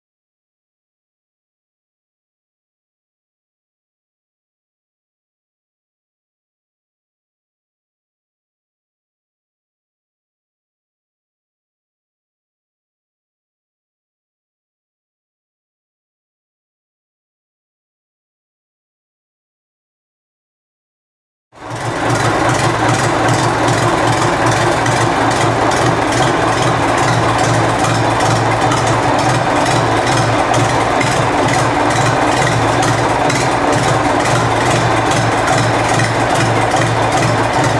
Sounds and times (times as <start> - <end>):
Heavy engine (low frequency): 21.6 - 37.7
Idling: 21.6 - 37.7.